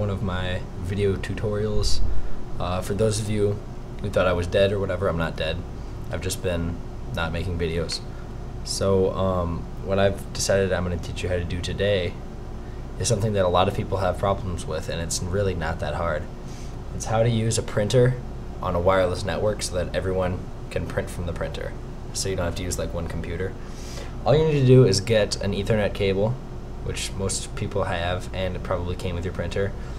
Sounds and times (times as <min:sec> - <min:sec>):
Speech: 0:00.0 - 0:12.2, 0:13.0 - 0:16.3, 0:16.9 - 0:23.6, 0:24.2 - 0:29.8.